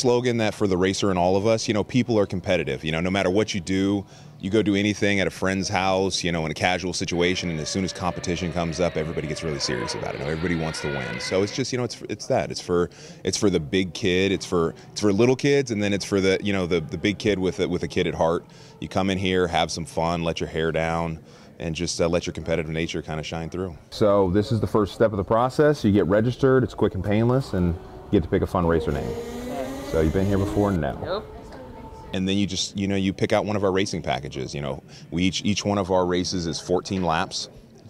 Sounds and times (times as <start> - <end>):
Speech: 0.0 - 29.1, 32.1 - 37.8.